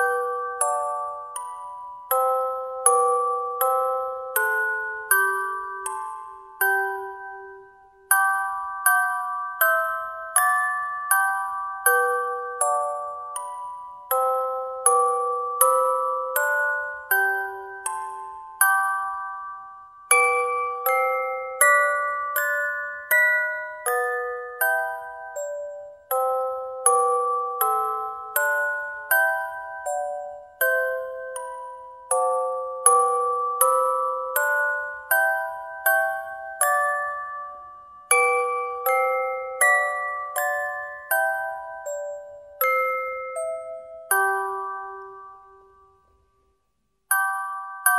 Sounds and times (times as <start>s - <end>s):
Jingle (music): 0.0s - 46.2s, 47.1s - 47.9s.